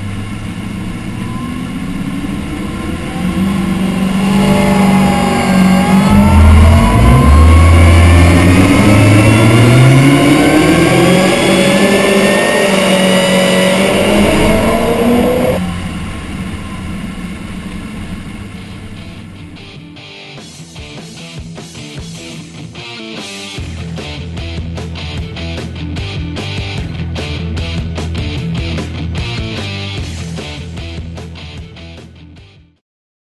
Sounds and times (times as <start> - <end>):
Music: 3.4 - 11.2, 18.5 - 32.8.